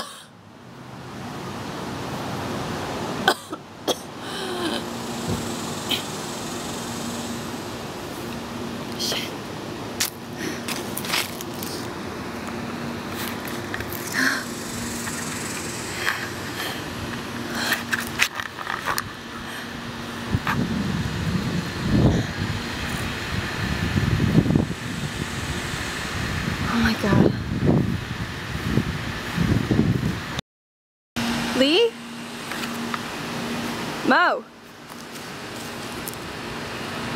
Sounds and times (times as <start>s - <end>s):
Outside, rural or natural: 0.0s - 30.4s, 31.2s - 37.1s
Speech: 26.7s - 27.4s, 34.1s - 34.5s.